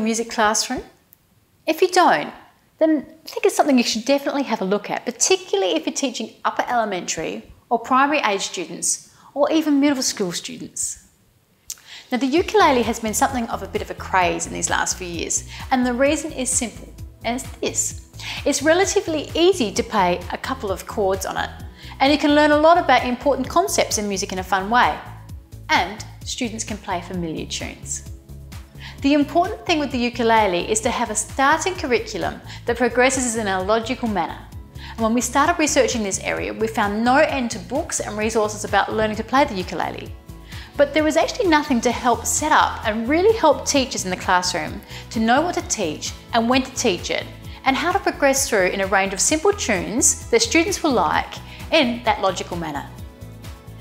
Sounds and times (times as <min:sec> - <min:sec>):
Speech: 0:00.0 - 0:01.0, 0:01.7 - 0:11.1, 0:12.1 - 0:25.1, 0:25.7 - 0:28.0, 0:29.0 - 0:40.1, 0:40.8 - 0:53.0
Music: 0:01.8 - 0:11.0, 0:11.7 - 0:53.8.